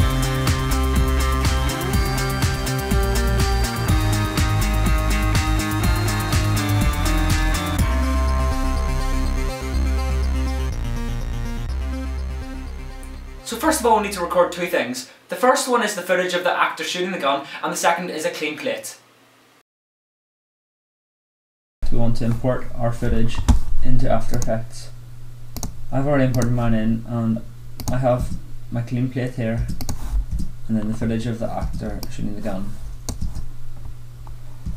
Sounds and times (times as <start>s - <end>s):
Speech: 13.5s - 19.0s, 21.8s - 25.0s, 25.9s - 29.7s, 30.7s - 32.8s.